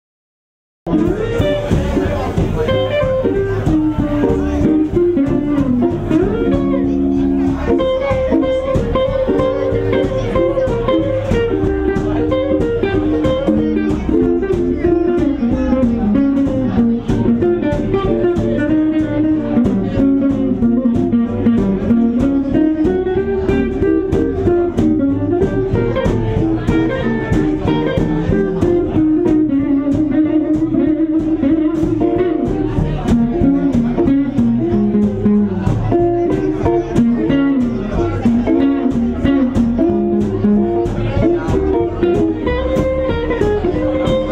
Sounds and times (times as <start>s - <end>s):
Blues: 0.9s - 44.3s
Speech: 0.9s - 44.3s.